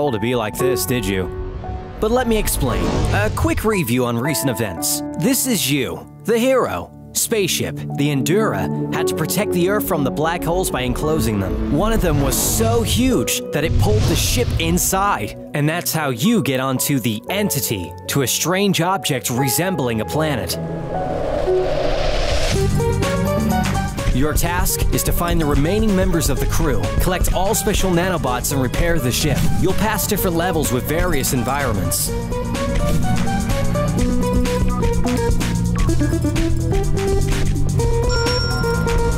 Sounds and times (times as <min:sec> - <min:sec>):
Speech: 0:00.0 - 0:01.3, 0:02.0 - 0:20.6, 0:24.1 - 0:32.1
Music: 0:00.0 - 0:39.1.